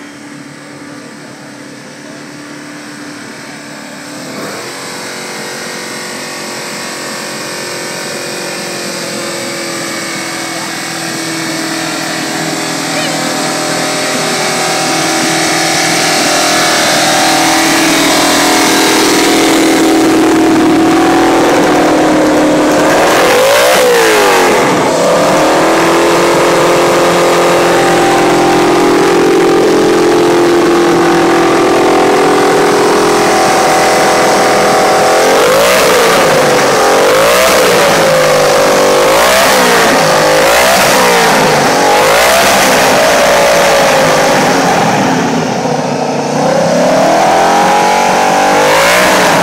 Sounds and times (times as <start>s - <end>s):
Vehicle: 0.0s - 49.4s
Accelerating, revving, vroom: 9.2s - 45.4s, 46.3s - 49.4s.